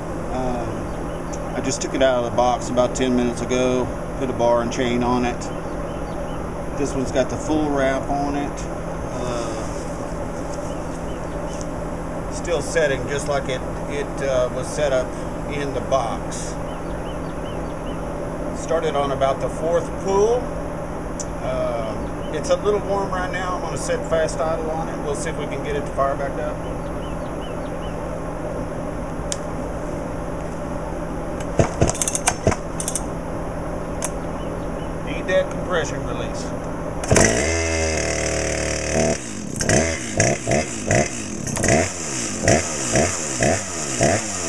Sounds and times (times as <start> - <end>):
Speech: 0.3 - 0.9, 1.5 - 5.5, 6.8 - 9.8, 12.3 - 16.6, 18.6 - 20.5, 21.2 - 26.7, 35.1 - 36.6.